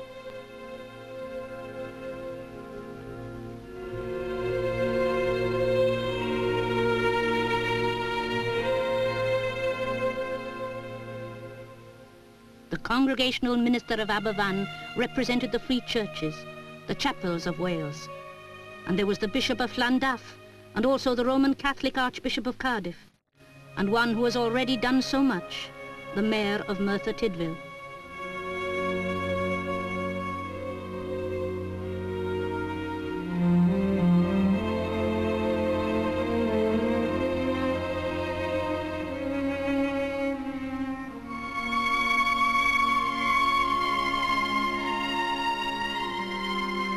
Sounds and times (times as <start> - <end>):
Cello: 0.0 - 22.1, 23.4 - 46.9.